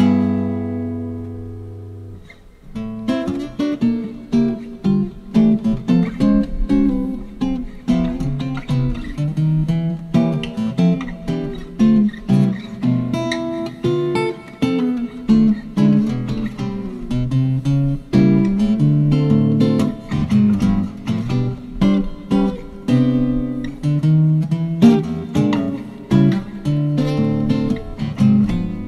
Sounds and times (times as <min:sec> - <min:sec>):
Acoustic guitar: 0:00.0 - 0:28.8.